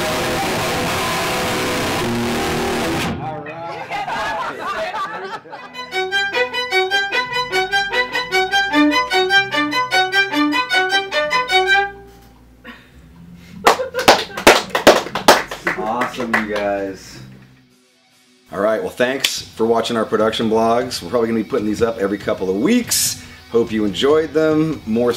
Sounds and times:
Violin, fiddle: 0:05.7 - 0:12.1.

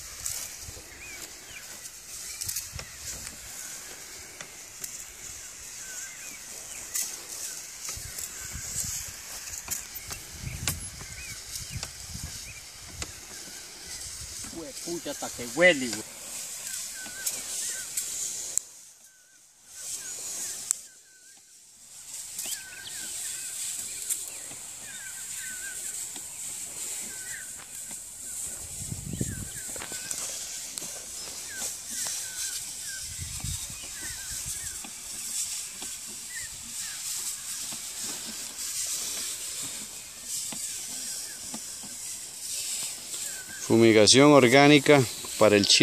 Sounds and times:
Rustling leaves: 0:00.0 - 0:45.8.

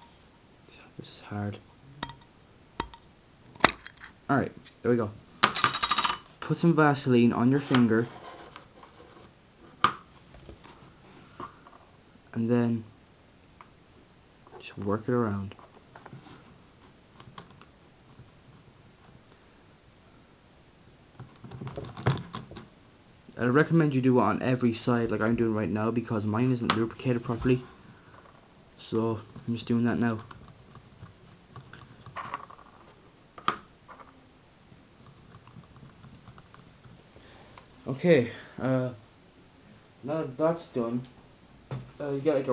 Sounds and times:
Speech: 0:00.7 - 0:01.7, 0:04.3 - 0:05.2, 0:06.4 - 0:08.1, 0:12.3 - 0:12.9, 0:14.6 - 0:15.6, 0:23.3 - 0:27.7, 0:28.8 - 0:30.3, 0:37.8 - 0:39.0, 0:40.0 - 0:41.2, 0:42.0 - 0:42.5.

